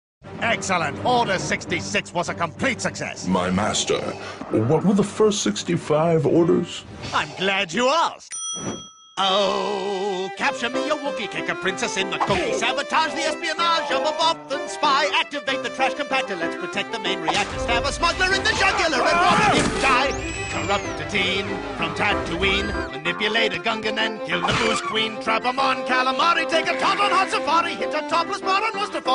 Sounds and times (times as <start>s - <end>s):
Music: 0.2s - 7.2s, 9.2s - 29.1s
Speech: 0.4s - 8.3s, 9.2s - 21.4s.